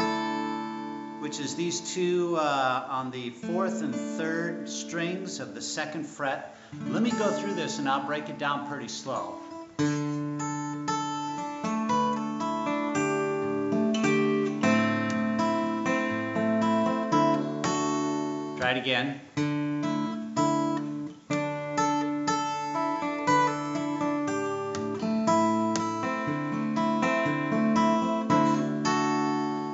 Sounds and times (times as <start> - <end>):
Acoustic guitar: 0.0 - 29.7
Speech: 1.2 - 9.5, 18.6 - 19.3
Strum: 6.6 - 18.9.